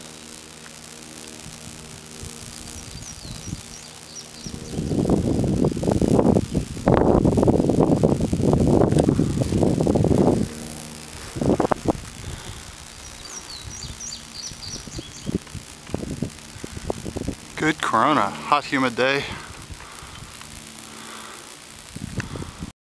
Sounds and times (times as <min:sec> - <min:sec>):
Speech: 0:17.6 - 0:19.5.